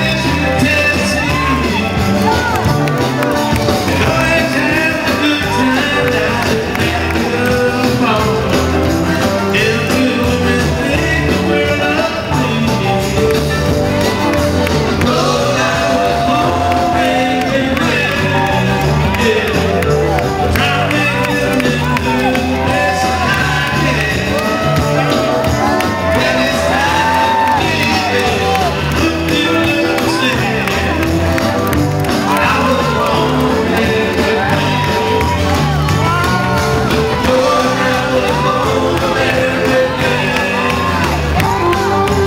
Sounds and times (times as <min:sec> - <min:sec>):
Crowd: 0:00.0 - 0:42.2
Music: 0:00.0 - 0:42.2.